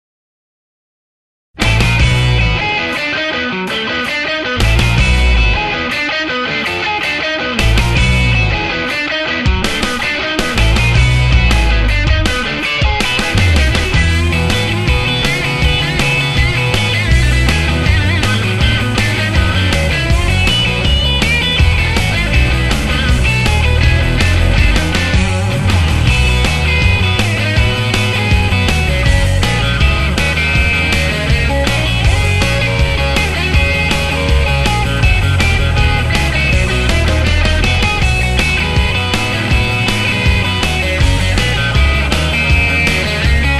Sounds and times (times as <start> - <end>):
Electric guitar: 1.6 - 43.5.